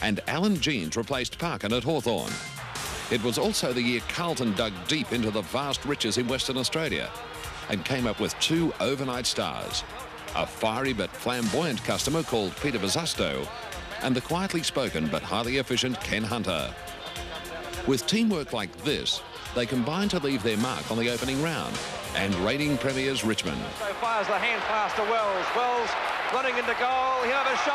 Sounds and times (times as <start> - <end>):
Speech: 0.0 - 2.4, 3.1 - 16.8, 17.8 - 27.7
Music: 0.0 - 27.7.